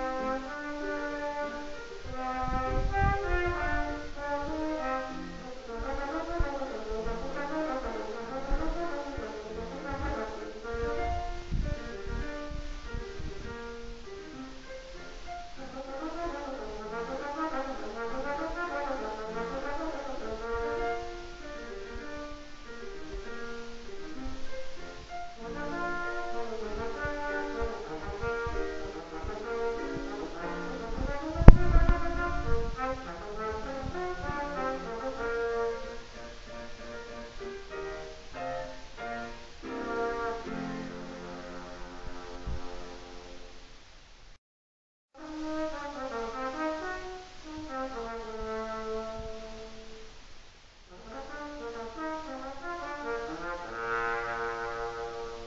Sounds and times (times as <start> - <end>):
Trombone: 0.0 - 43.6, 45.2 - 50.2, 50.9 - 55.4.